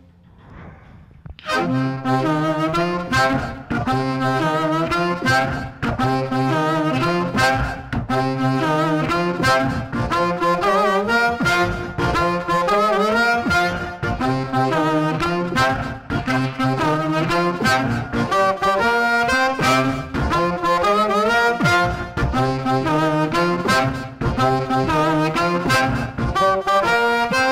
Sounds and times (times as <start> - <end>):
Harmonica: 1.4 - 27.5
Wind instrument, woodwind instrument: 1.4 - 27.5.